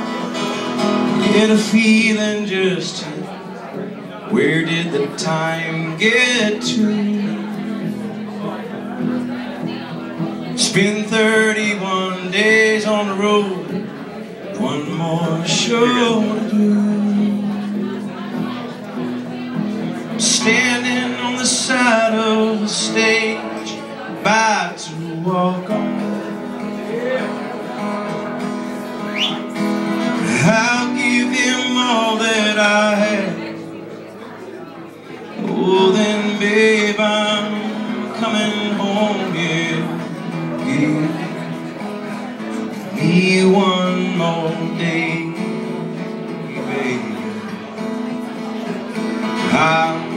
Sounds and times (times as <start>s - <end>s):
Acoustic guitar: 0.0s - 50.1s
Speech: 0.1s - 50.1s.